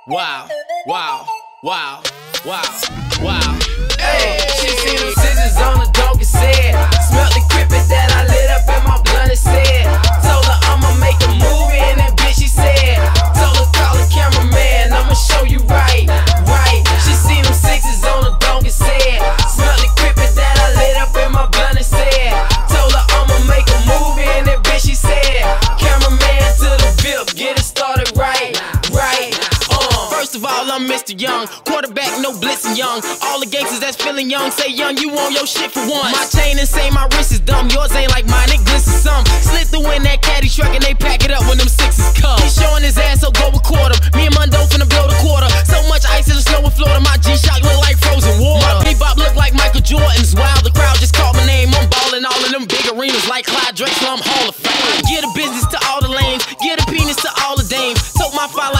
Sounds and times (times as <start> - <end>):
Disco: 1.9 - 58.7.